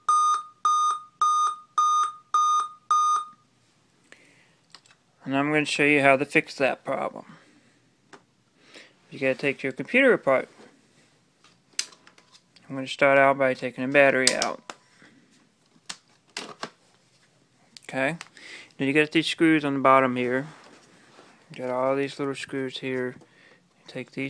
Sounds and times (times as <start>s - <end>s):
Speech: 5.2s - 7.3s, 9.1s - 10.5s, 12.7s - 14.6s, 17.8s - 18.2s, 18.8s - 20.6s, 21.6s - 23.2s, 23.9s - 24.3s.